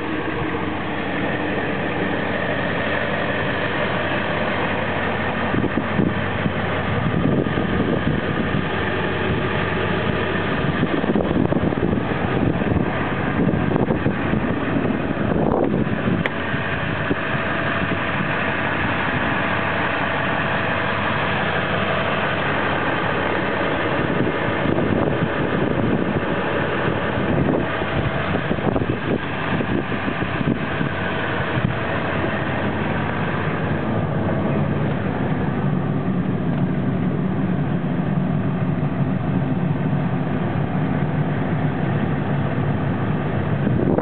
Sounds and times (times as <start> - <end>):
Vehicle: 0.0 - 44.0.